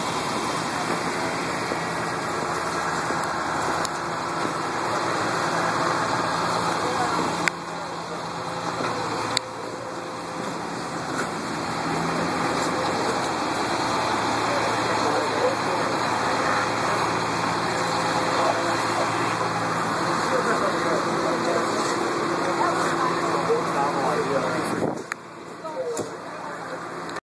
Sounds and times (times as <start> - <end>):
Vehicle: 0.0 - 27.2
Speech: 6.3 - 10.5, 12.2 - 27.2.